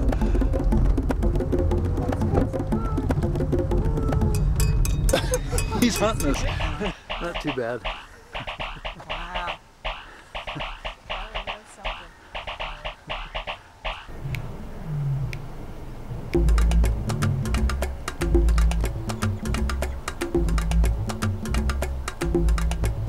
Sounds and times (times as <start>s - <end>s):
Music: 0.0s - 7.5s, 16.3s - 23.0s.